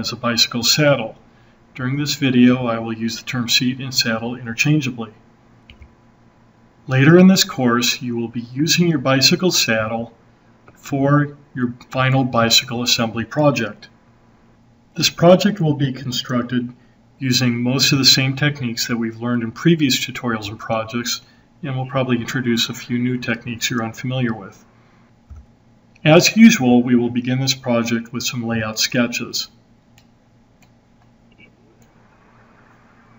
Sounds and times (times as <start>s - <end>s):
Speech: 0.0s - 1.2s, 1.8s - 5.2s, 6.9s - 10.2s, 10.8s - 14.0s, 15.0s - 24.7s, 26.0s - 29.6s.